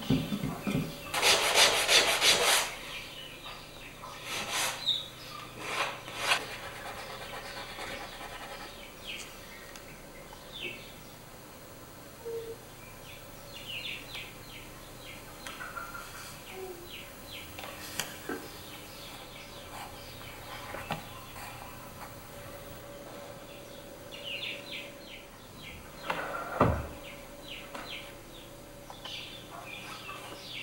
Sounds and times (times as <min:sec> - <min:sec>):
Rub: 0:01.1 - 0:02.8, 0:04.2 - 0:04.8, 0:05.6 - 0:08.8.